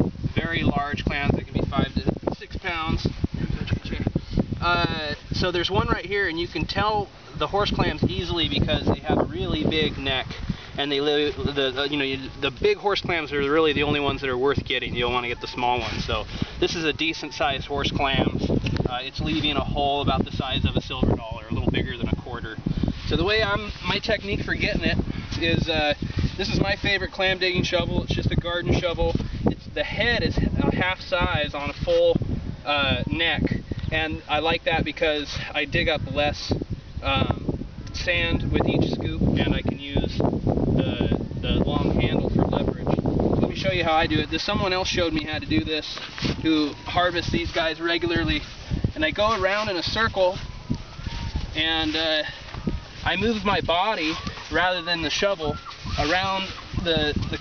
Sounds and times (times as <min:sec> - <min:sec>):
Speech: 0:00.4 - 0:40.2, 0:40.8 - 0:50.4, 0:51.6 - 0:52.4, 0:53.0 - 0:57.4.